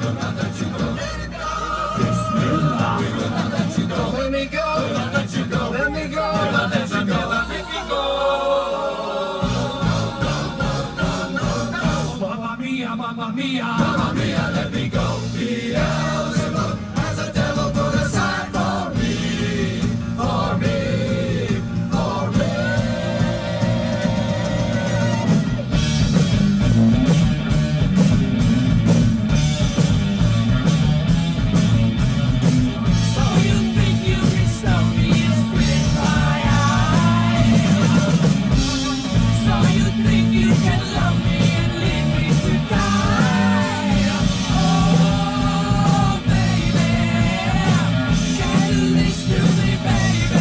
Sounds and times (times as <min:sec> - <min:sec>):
A capella: 0:00.0 - 0:25.8, 0:32.7 - 0:50.4
Singing: 0:00.0 - 0:25.8, 0:32.7 - 0:50.4.